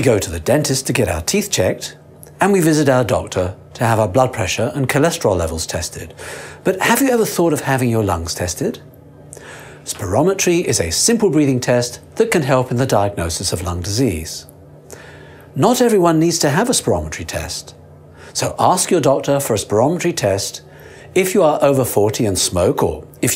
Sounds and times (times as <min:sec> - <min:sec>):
Speech: 0:00.0 - 0:08.8, 0:09.9 - 0:14.5, 0:15.6 - 0:17.8, 0:18.4 - 0:23.3.